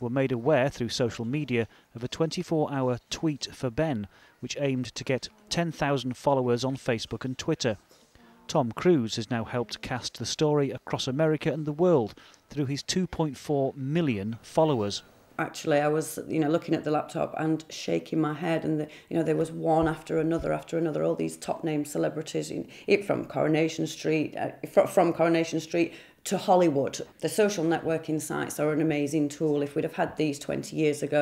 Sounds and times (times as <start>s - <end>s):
Speech: 8.5s - 31.2s.